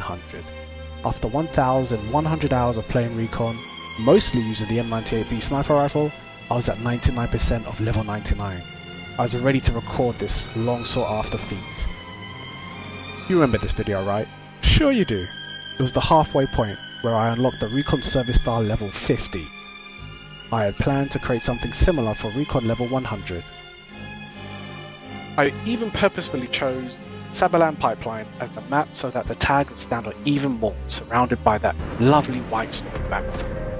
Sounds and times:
Speech: 0.0s - 8.6s, 9.2s - 12.0s, 13.3s - 19.5s, 20.5s - 23.4s, 25.4s - 33.5s
Music: 0.0s - 33.7s.

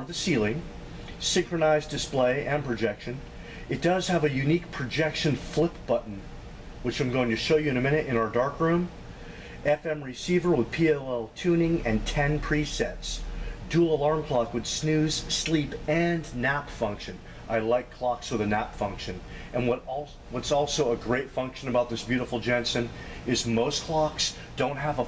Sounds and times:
Speech: 0.0s - 9.0s, 9.6s - 25.0s.

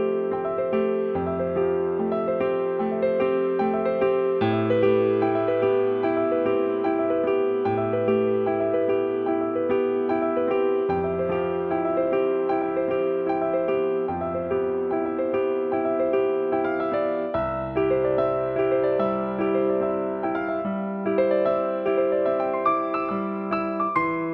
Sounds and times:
Music: 0.0s - 24.3s.

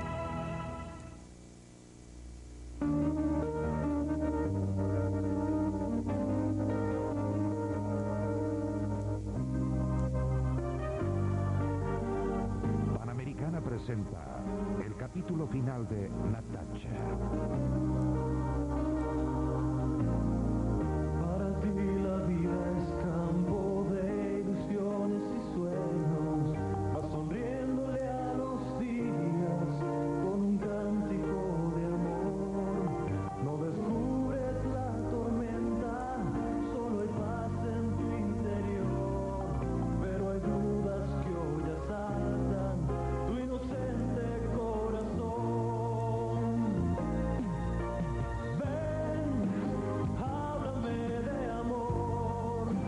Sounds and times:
Music: 0.0s - 52.8s.

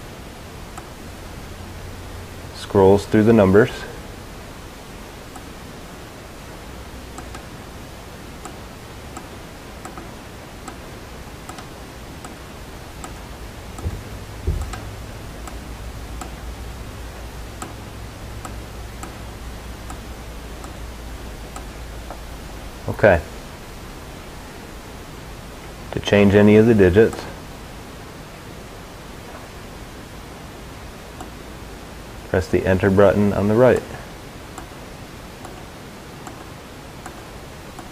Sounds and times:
Speech: 2.6s - 4.0s, 22.9s - 23.3s, 25.9s - 27.4s, 32.3s - 34.1s.

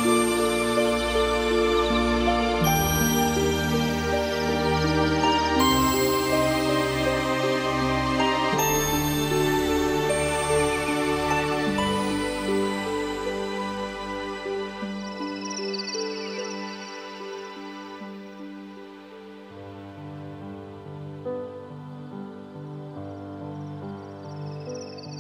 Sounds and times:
Background music: 0.0s - 25.2s
New-age music: 0.0s - 25.2s.

